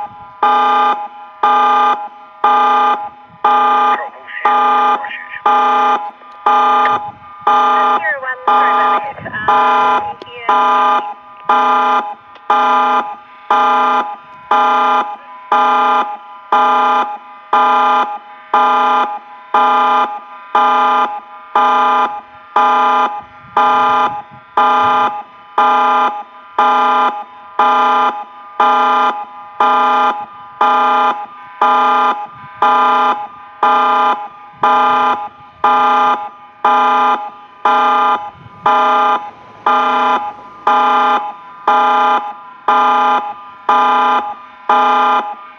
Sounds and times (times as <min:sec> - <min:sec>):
Siren: 0:00.0 - 0:45.5
Speech: 0:03.9 - 0:05.5, 0:07.8 - 0:10.6.